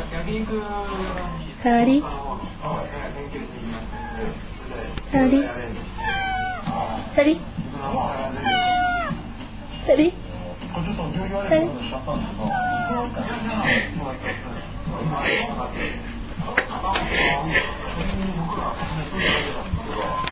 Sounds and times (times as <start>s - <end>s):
Meow: 6.0s - 6.8s, 8.4s - 9.2s, 12.5s - 13.2s.